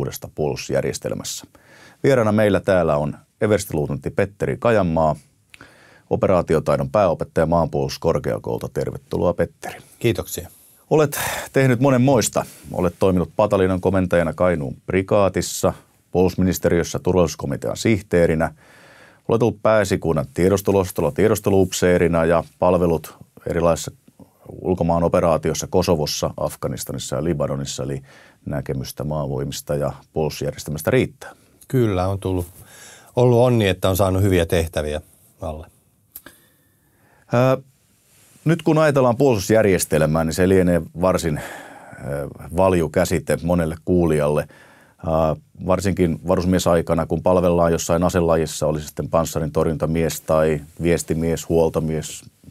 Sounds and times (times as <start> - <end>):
Speech: 0.0 - 5.3, 6.1 - 18.6, 19.3 - 32.6, 33.2 - 35.8, 37.3 - 37.7, 38.4 - 52.5.